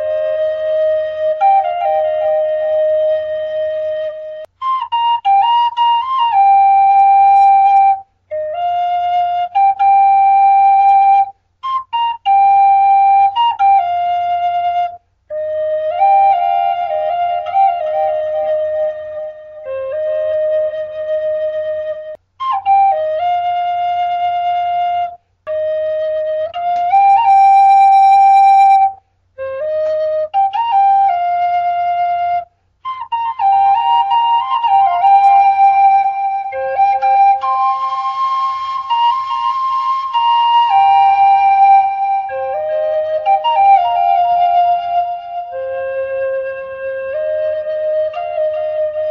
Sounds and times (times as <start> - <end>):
Flute: 0.0 - 49.1.